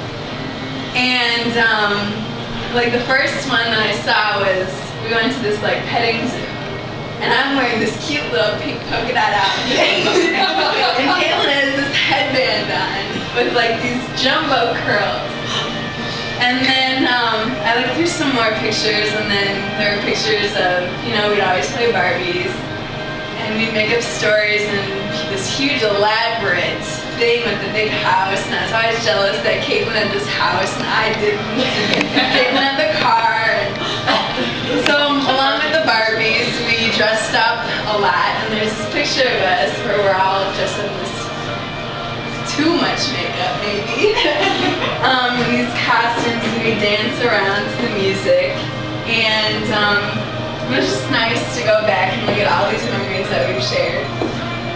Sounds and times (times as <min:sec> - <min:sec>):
Music: 0:00.0 - 0:54.7
Female speech, woman speaking: 0:01.0 - 0:06.5, 0:07.2 - 0:15.7, 0:16.4 - 0:22.6, 0:23.4 - 0:41.4, 0:42.4 - 0:54.3.